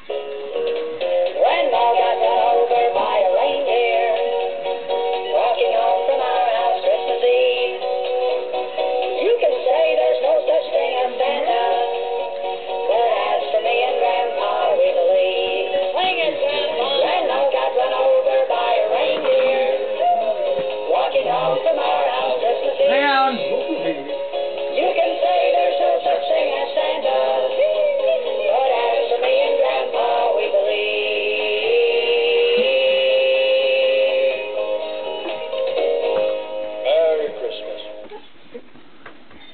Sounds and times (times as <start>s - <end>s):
Music: 0.0s - 38.2s.